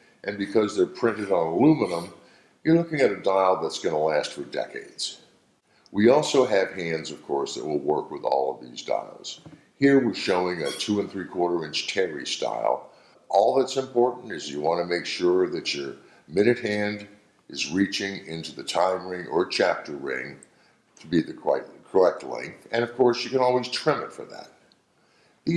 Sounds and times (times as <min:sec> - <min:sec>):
Speech: 0:00.2 - 0:05.3, 0:05.9 - 0:20.4, 0:21.0 - 0:24.6.